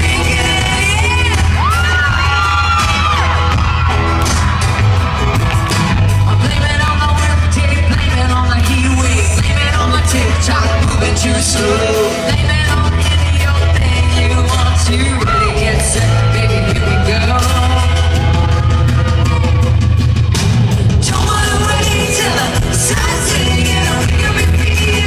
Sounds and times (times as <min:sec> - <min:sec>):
Singing: 0:00.0 - 0:03.7, 0:06.2 - 0:19.3, 0:21.0 - 0:25.0
Inside, large room or hall: 0:00.0 - 0:25.0
Music: 0:00.0 - 0:25.0.